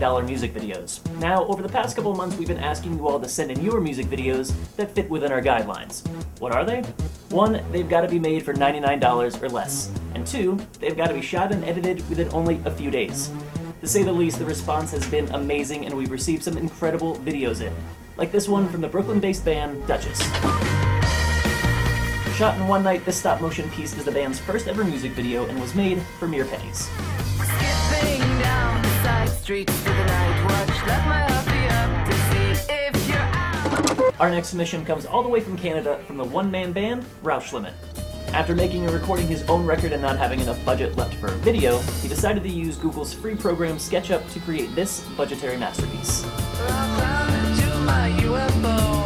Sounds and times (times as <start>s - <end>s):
Speech: 0.0s - 20.4s, 22.3s - 26.9s, 34.2s - 46.3s
Music: 0.0s - 49.0s.